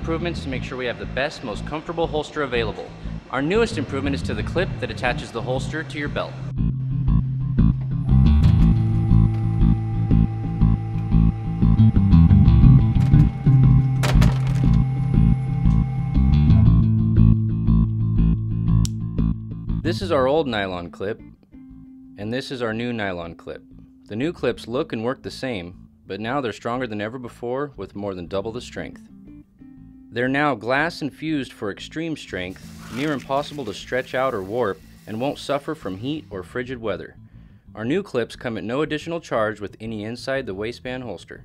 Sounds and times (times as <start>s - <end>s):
Speech: 0.0s - 6.4s, 19.8s - 21.2s, 22.2s - 29.0s, 30.1s - 37.2s, 37.8s - 41.4s
Music: 0.0s - 41.4s.